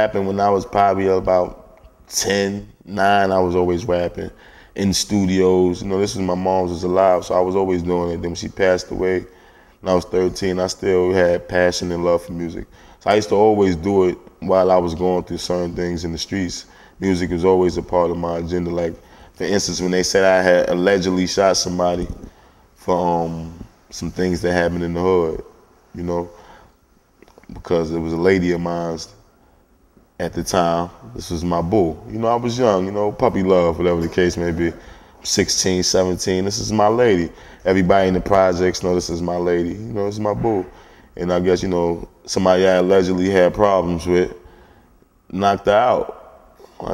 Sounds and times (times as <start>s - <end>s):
Speech: 0.0s - 26.4s, 27.3s - 29.2s, 30.2s - 44.4s, 45.3s - 46.9s.